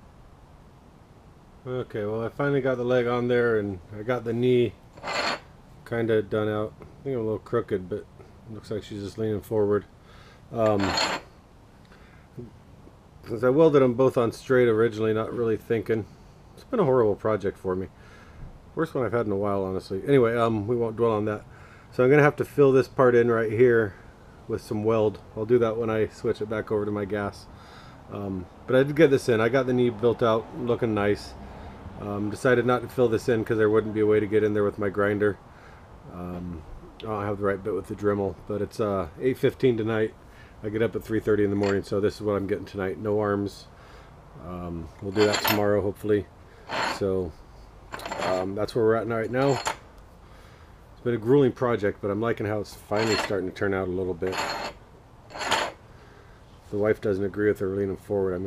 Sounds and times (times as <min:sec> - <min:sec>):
Speech: 0:01.6 - 0:04.8, 0:05.8 - 0:09.9, 0:10.5 - 0:11.0, 0:13.2 - 0:17.9, 0:18.8 - 0:27.5, 0:28.1 - 0:31.4, 0:32.0 - 0:35.4, 0:36.1 - 0:43.7, 0:44.4 - 0:46.3, 0:47.0 - 0:47.4, 0:48.2 - 0:49.6, 0:51.0 - 0:54.4, 0:56.7 - 0:58.4.